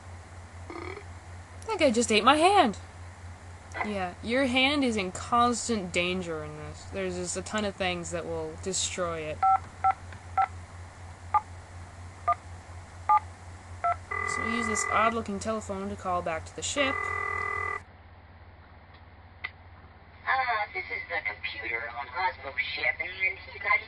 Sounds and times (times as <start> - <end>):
Speech: 1.7 - 2.8, 3.8 - 9.4, 14.3 - 17.0, 20.3 - 23.8.